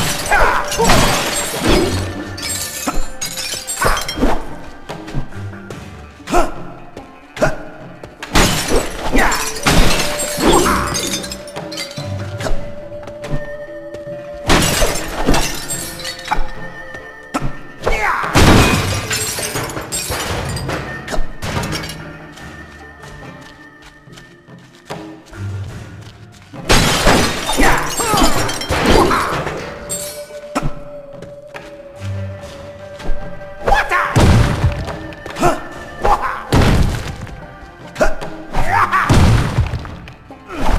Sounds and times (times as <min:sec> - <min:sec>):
Music: 0:00.0 - 0:40.7.